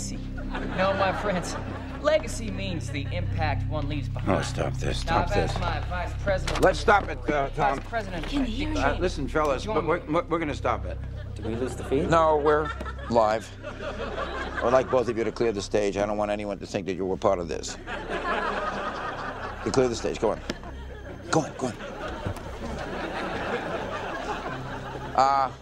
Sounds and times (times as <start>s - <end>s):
Conversation: 0.0s - 25.6s
Female speech, woman speaking: 2.1s - 4.1s, 5.1s - 6.6s, 7.6s - 9.0s
Male speech, man speaking: 3.3s - 5.8s, 6.4s - 13.6s, 14.6s - 17.8s, 19.6s - 20.5s, 21.3s - 21.8s, 25.2s - 25.6s.